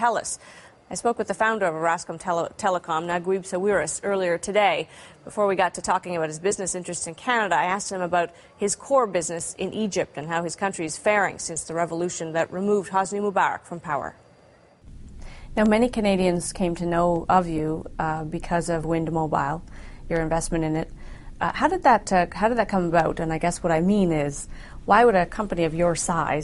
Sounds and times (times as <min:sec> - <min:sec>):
Speech: 0:00.0 - 0:14.2, 0:15.6 - 0:26.4.